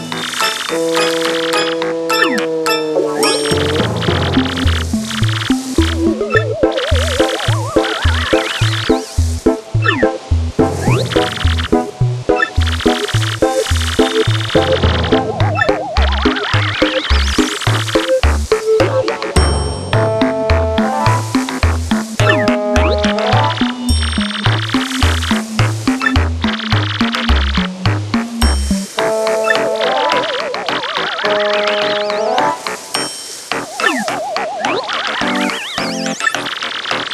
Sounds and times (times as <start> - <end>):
Music: 0.0 - 37.1.